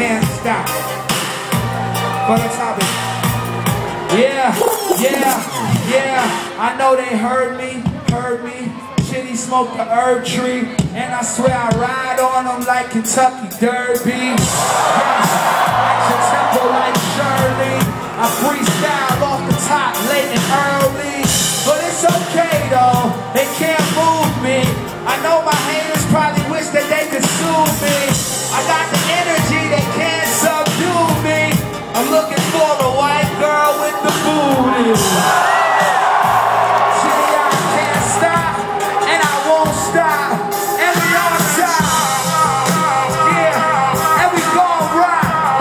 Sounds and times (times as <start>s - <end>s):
Crowd: 0.0s - 45.6s
Music: 0.0s - 45.6s.